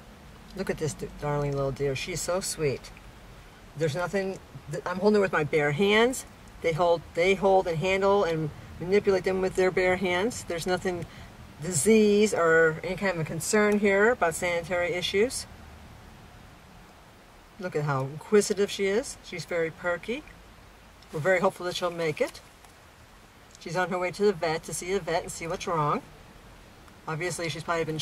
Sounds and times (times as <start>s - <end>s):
Speech: 0.5s - 3.0s, 3.8s - 15.5s, 17.6s - 20.3s, 21.1s - 22.4s, 23.6s - 26.1s, 27.1s - 28.0s.